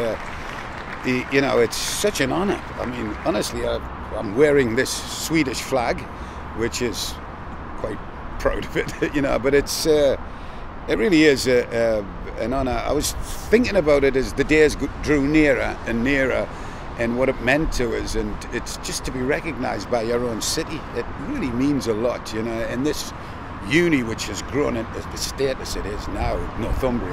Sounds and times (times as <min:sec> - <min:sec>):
Speech: 0:00.0 - 0:00.2, 0:01.1 - 0:07.2, 0:07.8 - 0:10.2, 0:10.9 - 0:27.1.